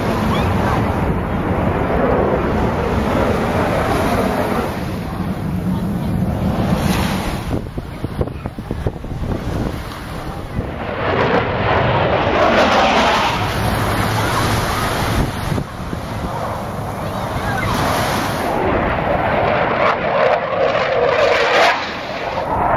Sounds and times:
Wind noise (microphone): 0.0 - 22.7.

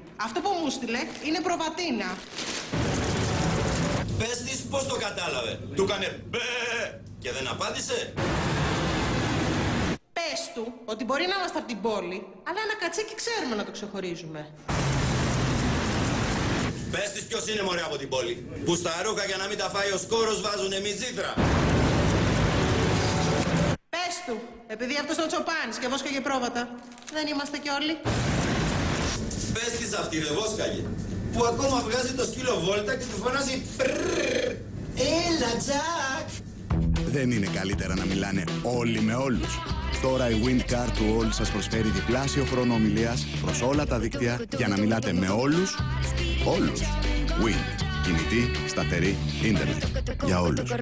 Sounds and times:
Music: 36.6 - 50.8.

